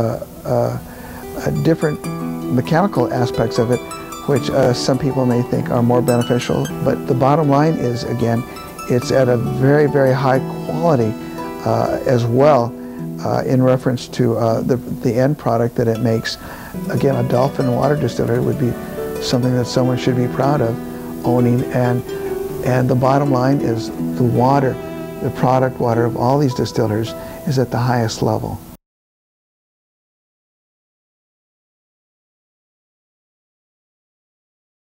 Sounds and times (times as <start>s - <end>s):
Speech: 0.0s - 0.8s, 1.4s - 28.6s
Music: 0.0s - 28.8s.